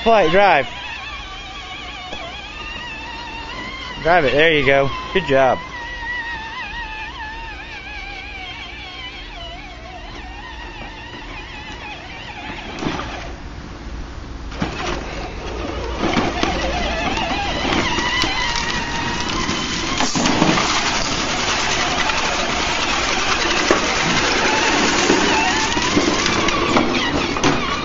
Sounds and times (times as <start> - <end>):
Speech: 0.0 - 0.7, 4.0 - 5.6
Outside, rural or natural: 0.0 - 27.8
Vehicle: 0.0 - 27.8.